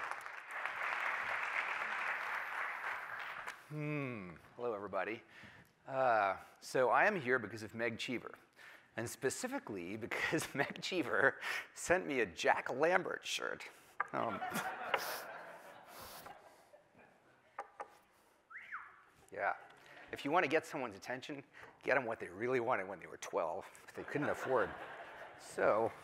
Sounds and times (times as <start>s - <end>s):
Narration, monologue: 3.5s - 16.8s, 17.4s - 26.0s
Male speech, man speaking: 3.8s - 5.2s, 5.9s - 8.4s, 9.0s - 14.4s, 19.3s - 24.8s, 25.4s - 26.0s.